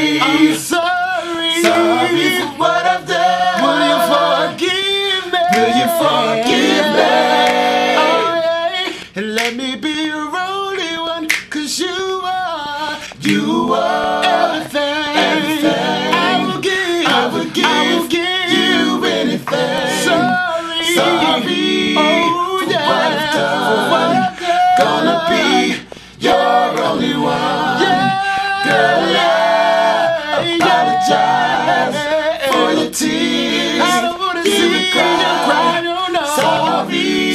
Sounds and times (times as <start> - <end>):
Choir: 0.0 - 37.3.